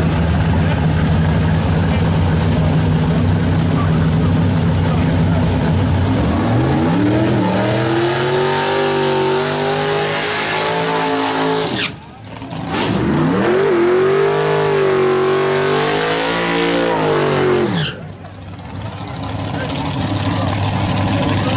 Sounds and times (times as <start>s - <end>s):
Speech: 3.7s - 5.6s, 18.1s - 21.5s.